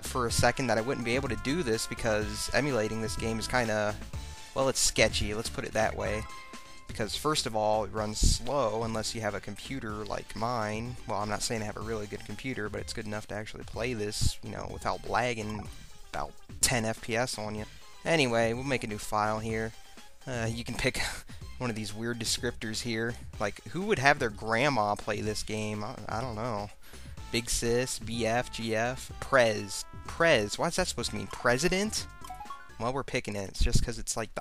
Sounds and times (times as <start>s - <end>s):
Speech: 0.0s - 4.0s, 4.6s - 6.3s, 6.9s - 19.7s, 20.3s - 32.1s, 32.8s - 34.4s
Video game music: 0.0s - 32.9s.